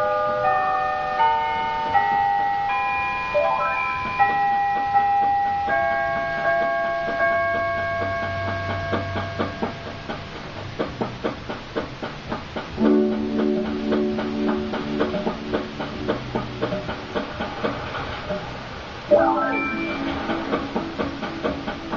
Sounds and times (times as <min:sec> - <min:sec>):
Tubular bells: 0:00.0 - 0:10.4.